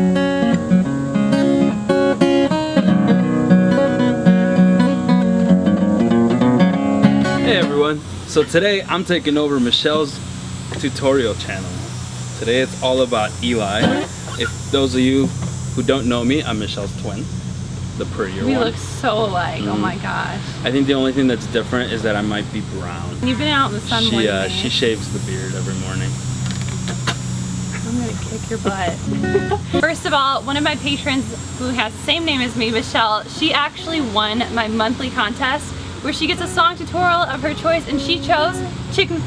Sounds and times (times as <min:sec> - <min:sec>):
Strum: 0:00.0 - 0:34.4.